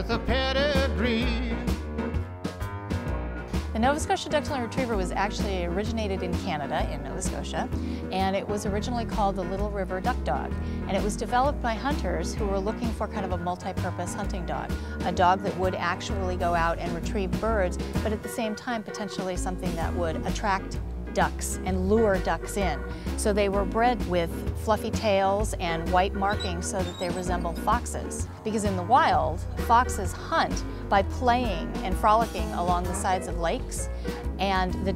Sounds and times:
Music: 0:00.0 - 0:34.9
Speech: 0:03.8 - 0:34.9.

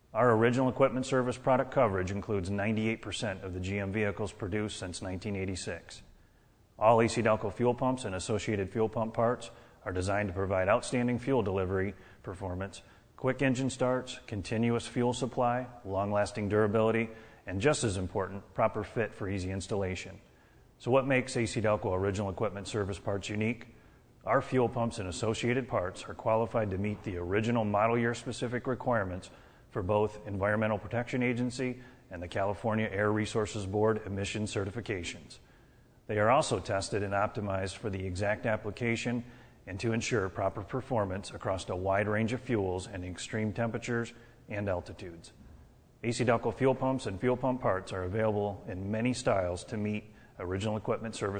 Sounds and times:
Speech: 0:00.0 - 0:06.1, 0:06.8 - 0:35.4, 0:36.1 - 0:45.4, 0:46.0 - 0:51.3.

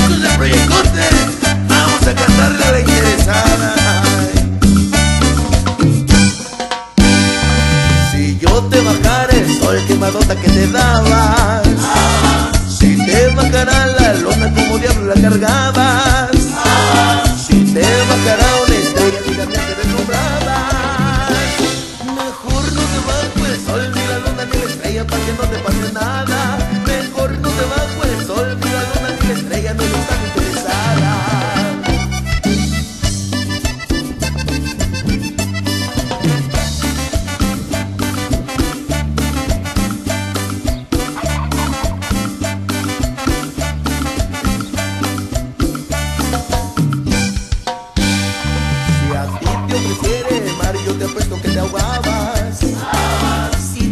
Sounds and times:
Music: 0:00.0 - 0:53.9.

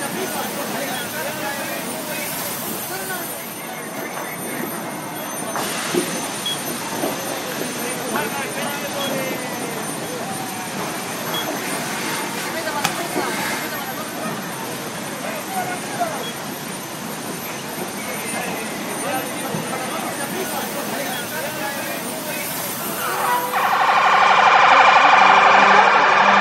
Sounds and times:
Speech: 0:00.0 - 0:04.9, 0:07.2 - 0:11.3, 0:12.1 - 0:16.4, 0:17.4 - 0:23.6.

